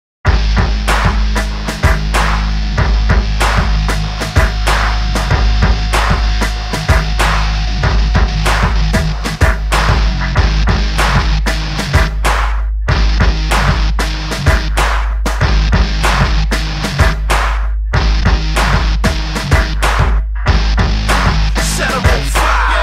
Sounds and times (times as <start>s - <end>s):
Sampler: 0.3s - 22.8s.